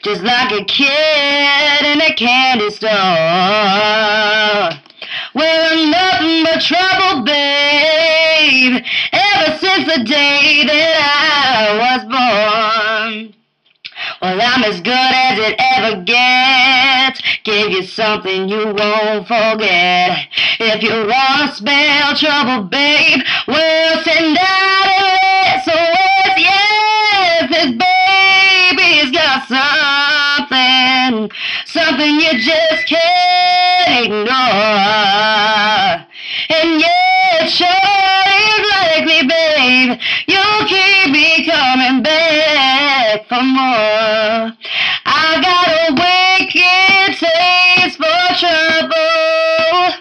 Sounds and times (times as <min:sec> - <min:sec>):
Female singing: 0:00.0 - 0:50.0.